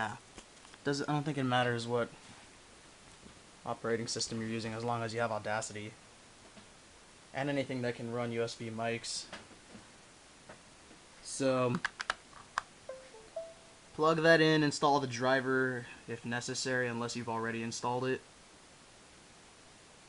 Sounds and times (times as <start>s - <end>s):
Speech: 0.0s - 0.2s, 0.8s - 2.2s, 3.7s - 6.0s, 7.4s - 9.4s, 11.2s - 11.8s, 14.0s - 18.3s.